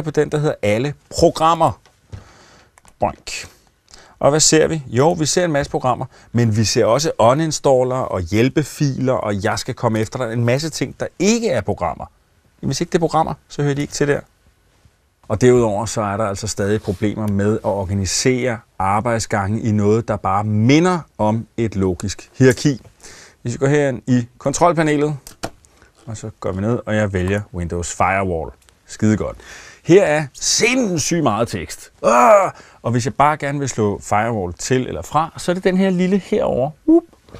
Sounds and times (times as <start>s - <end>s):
Speech: 0.0s - 1.8s, 3.0s - 3.6s, 4.2s - 14.3s, 15.3s - 25.2s, 26.0s - 37.1s.